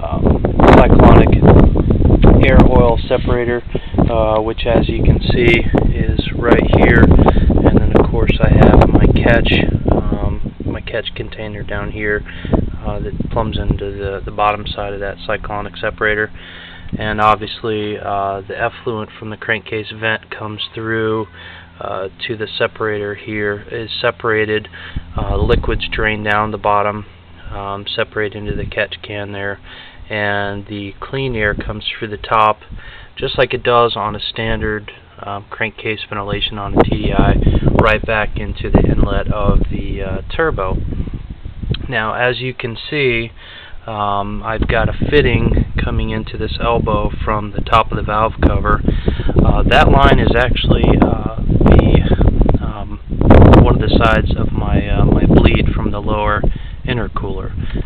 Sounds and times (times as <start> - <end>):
Speech: 0.0 - 1.5, 2.3 - 40.8, 41.8 - 57.6.